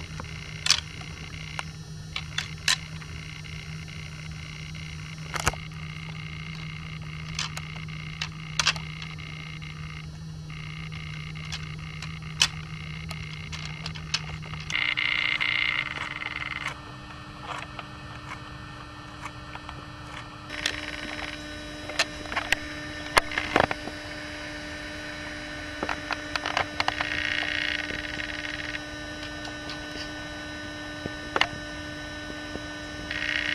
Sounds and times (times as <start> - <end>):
Outside, rural or natural: 0.0 - 33.5.